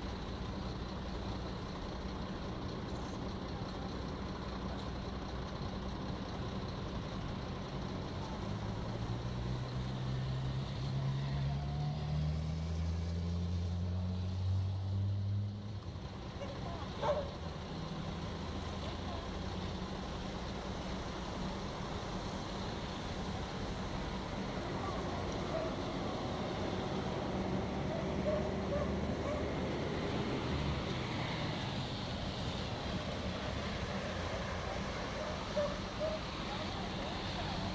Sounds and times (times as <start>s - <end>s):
Truck: 0.0s - 37.7s.